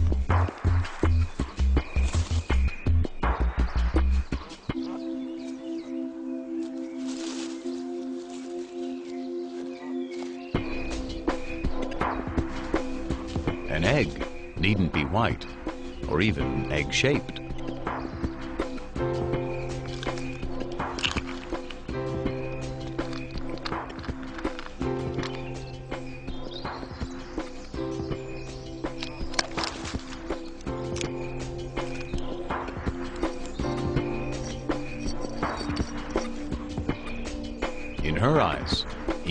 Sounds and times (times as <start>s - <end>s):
Music: 0.0s - 39.3s
Speech: 13.7s - 17.4s, 38.0s - 39.3s.